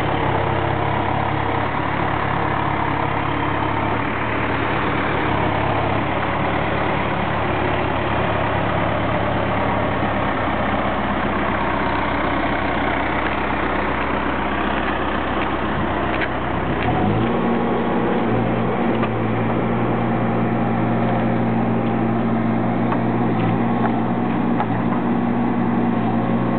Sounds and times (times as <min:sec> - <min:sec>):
Outside, rural or natural: 0:00.0 - 0:26.5
Vehicle: 0:00.0 - 0:26.5.